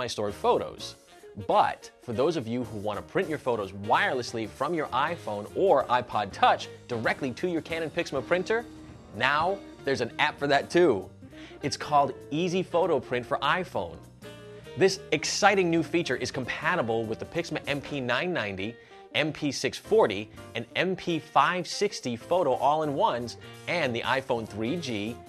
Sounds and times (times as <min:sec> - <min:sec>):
Speech: 0:00.0 - 0:08.6, 0:09.2 - 0:14.0, 0:14.8 - 0:25.2
Music: 0:00.0 - 0:25.2.